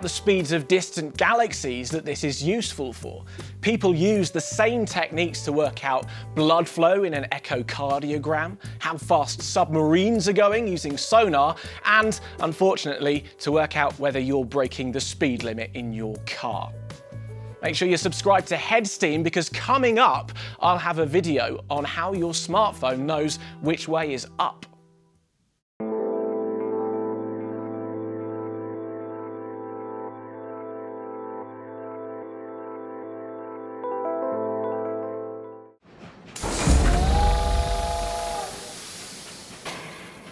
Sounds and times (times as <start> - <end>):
Music: 0.0 - 35.8, 36.6 - 38.5.